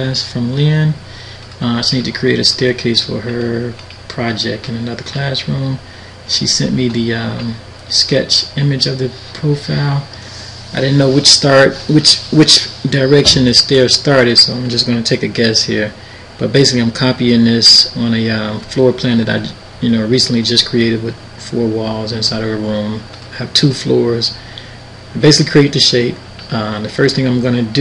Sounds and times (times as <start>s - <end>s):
Speech: 0.0s - 1.0s, 1.6s - 24.4s, 25.1s - 27.8s.